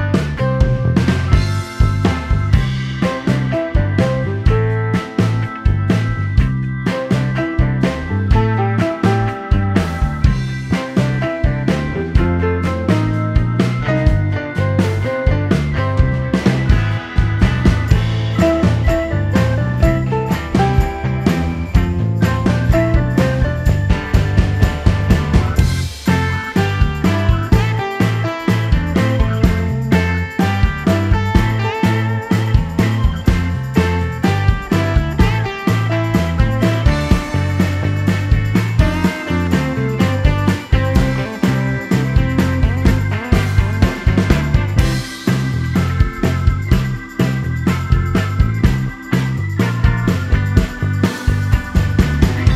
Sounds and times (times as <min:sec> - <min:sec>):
Music: 0:00.0 - 0:52.5.